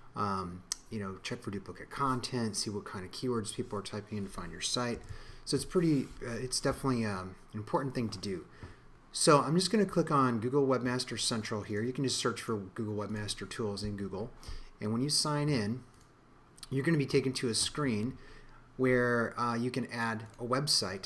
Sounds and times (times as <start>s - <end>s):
Speech: 0.2s - 8.5s, 9.1s - 15.9s, 16.6s - 18.2s, 18.8s - 21.0s.